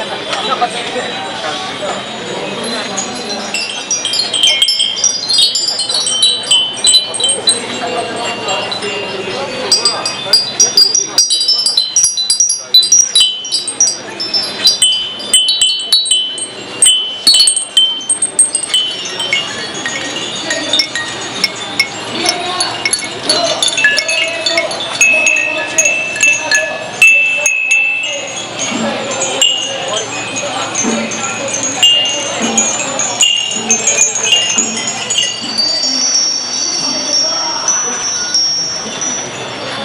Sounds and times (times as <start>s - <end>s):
Speech: 0.0s - 39.8s
Wind chime: 0.0s - 39.8s.